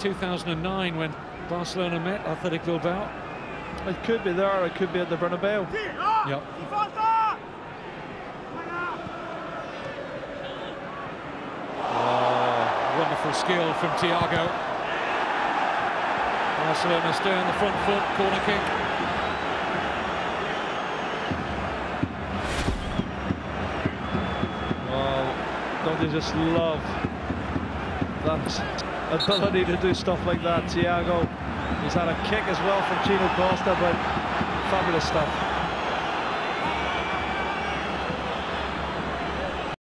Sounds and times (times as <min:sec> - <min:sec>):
Speech: 0:12.0 - 0:14.5, 0:16.6 - 0:18.6, 0:24.9 - 0:26.9, 0:28.3 - 0:34.0, 0:34.6 - 0:35.3.